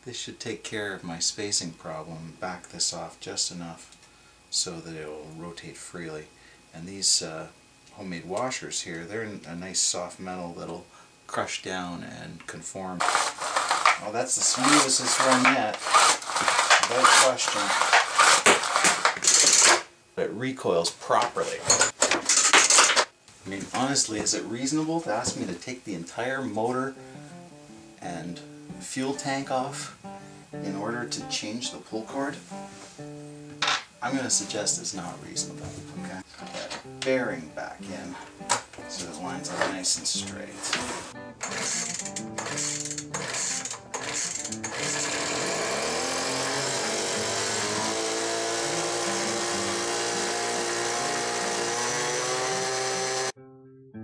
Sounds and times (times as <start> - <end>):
Tools: 14.7 - 19.8, 21.6 - 23.1, 40.7 - 45.3
Music: 23.8 - 45.1, 46.0 - 54.0.